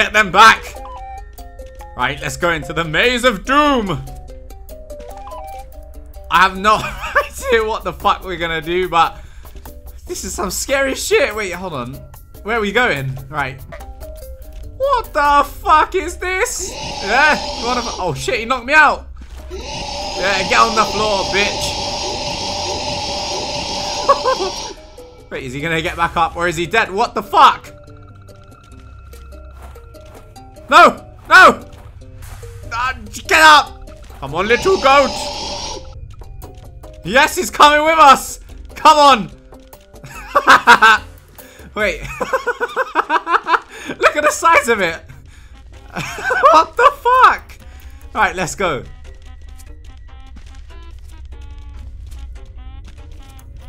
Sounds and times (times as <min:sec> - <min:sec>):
Speech: 0:10.1 - 0:13.6, 0:14.8 - 0:19.0, 0:20.2 - 0:21.8, 0:32.8 - 0:35.3, 0:37.1 - 0:39.3, 0:44.0 - 0:45.0, 0:48.2 - 0:48.9.